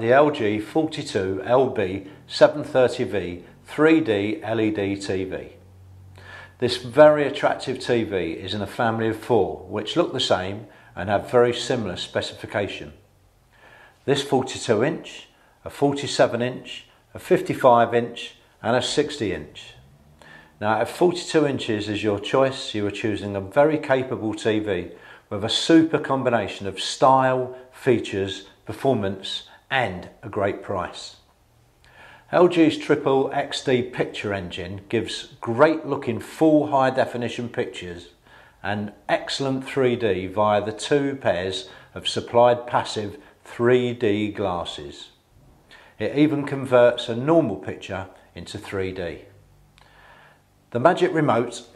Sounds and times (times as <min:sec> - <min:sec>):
Speech: 0:00.0 - 0:05.6, 0:06.6 - 0:13.1, 0:14.1 - 0:19.8, 0:20.6 - 0:31.3, 0:32.3 - 0:45.2, 0:46.0 - 0:49.4, 0:50.7 - 0:51.7.